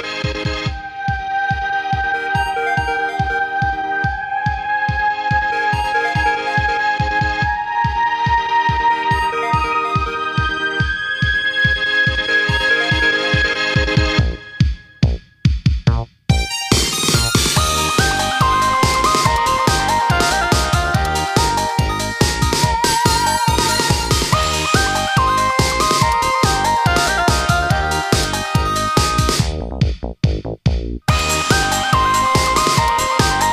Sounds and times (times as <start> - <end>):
Music: 0.0 - 33.5.